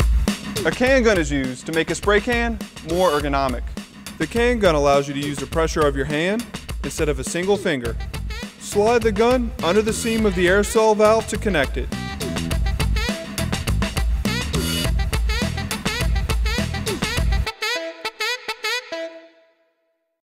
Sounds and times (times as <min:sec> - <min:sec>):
Music: 0:00.0 - 0:20.2
Speech: 0:00.6 - 0:08.0, 0:08.6 - 0:11.9.